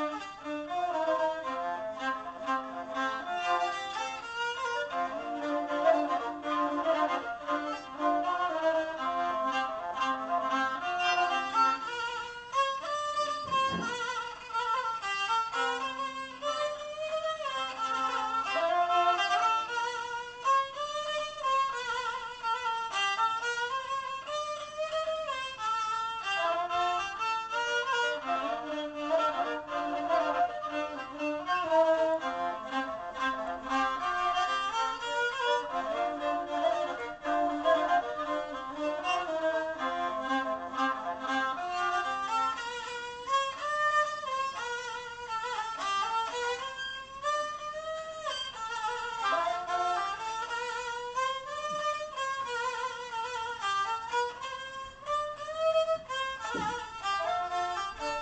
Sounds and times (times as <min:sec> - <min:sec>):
Violin, fiddle: 0:00.0 - 0:58.2.